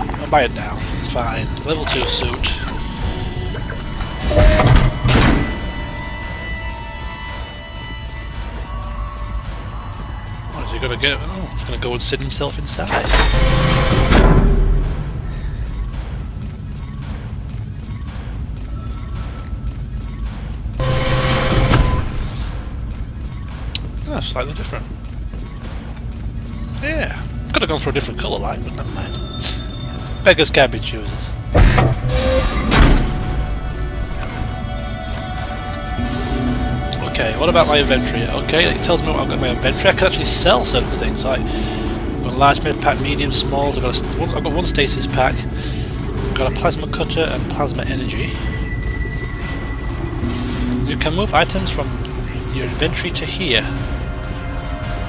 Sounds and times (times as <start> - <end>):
Music: 0.0 - 55.0.